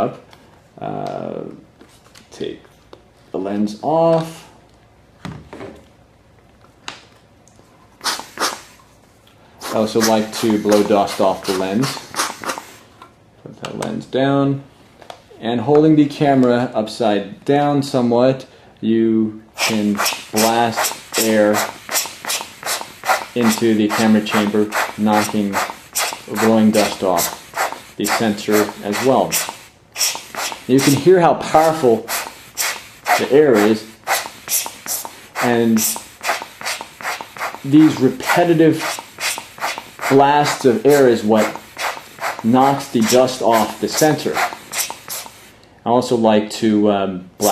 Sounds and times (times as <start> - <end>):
Speech: 0.8 - 1.6, 2.3 - 2.7, 3.3 - 4.5, 9.7 - 12.0, 13.4 - 14.7, 15.4 - 21.7, 23.4 - 25.6, 26.3 - 27.4, 28.0 - 29.4, 30.7 - 32.1, 33.2 - 33.9, 35.4 - 36.0, 37.7 - 38.9, 40.1 - 41.6, 42.4 - 44.5, 45.8 - 47.5.